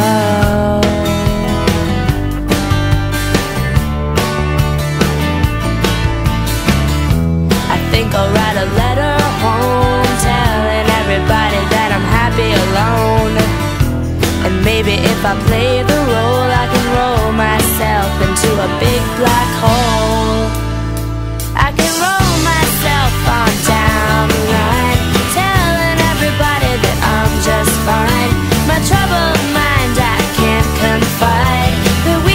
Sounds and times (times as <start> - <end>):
Music: 0.0 - 32.3.